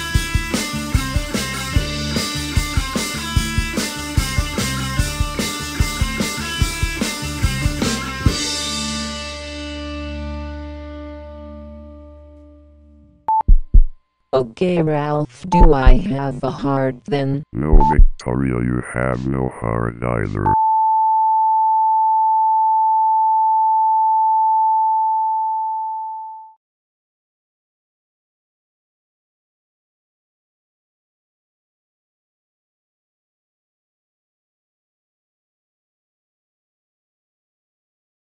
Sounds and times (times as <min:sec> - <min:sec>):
Speech: 0:14.4 - 0:20.6
Busy signal: 0:17.7 - 0:18.1, 0:20.4 - 0:26.5.